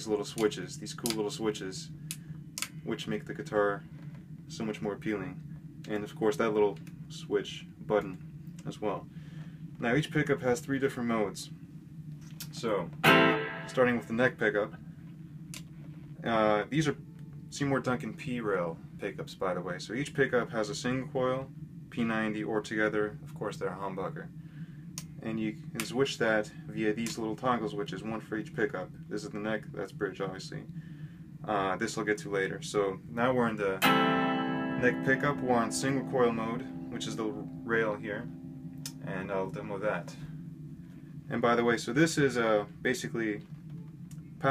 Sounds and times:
Speech: 0.0s - 1.9s, 2.8s - 3.8s, 4.5s - 9.1s, 9.8s - 11.5s, 12.4s - 13.0s, 13.7s - 14.8s, 16.2s - 24.3s, 25.2s - 30.7s, 31.4s - 33.8s, 34.8s - 38.3s, 39.0s - 40.3s, 41.3s - 43.4s
Music: 13.0s - 14.1s, 33.8s - 39.3s.

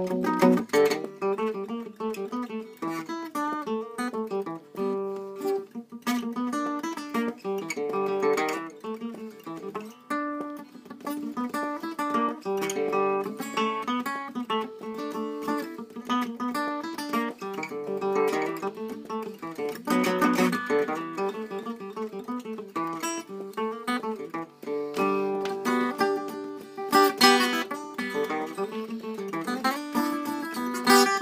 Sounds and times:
Country: 0.0s - 31.2s
Guitar: 0.0s - 31.2s.

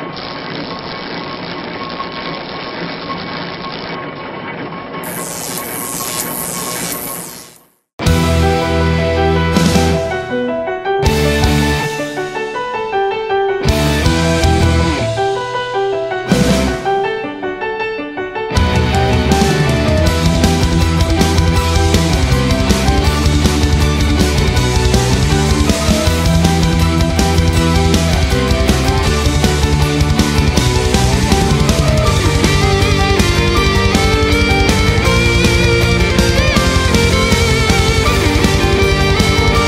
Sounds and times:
Heavy metal: 8.0s - 10.3s, 11.0s - 12.6s, 13.6s - 15.6s, 18.6s - 39.6s.

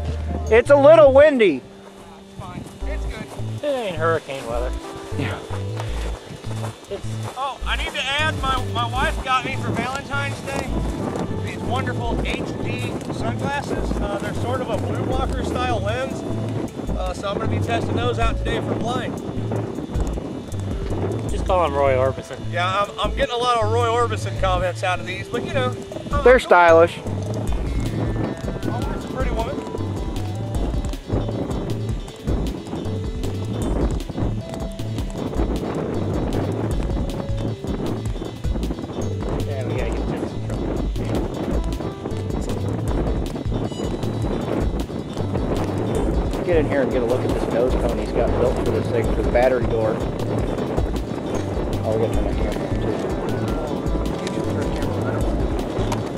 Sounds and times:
Music: 0.0s - 56.1s
Outside, rural or natural: 0.0s - 56.1s
Speech: 0.5s - 1.6s, 7.4s - 10.7s, 11.4s - 16.2s, 17.0s - 19.1s, 21.4s - 27.0s, 28.7s - 29.6s, 46.4s - 50.0s, 51.8s - 55.3s.

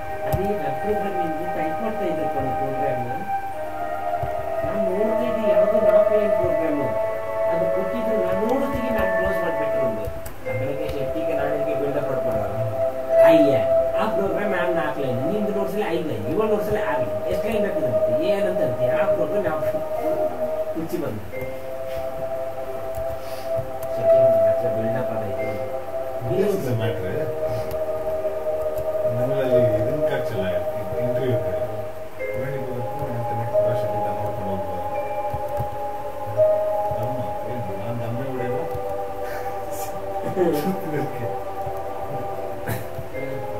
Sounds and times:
Music: 0.0s - 43.5s.

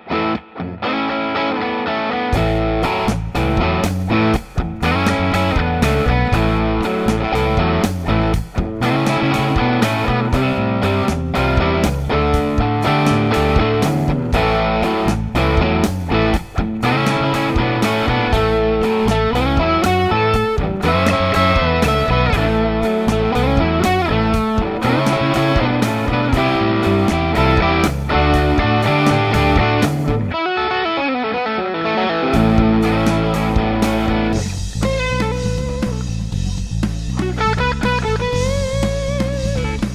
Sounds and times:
Distortion: 0.0s - 39.9s
Effects unit: 0.0s - 39.9s
Electric guitar: 0.0s - 39.9s.

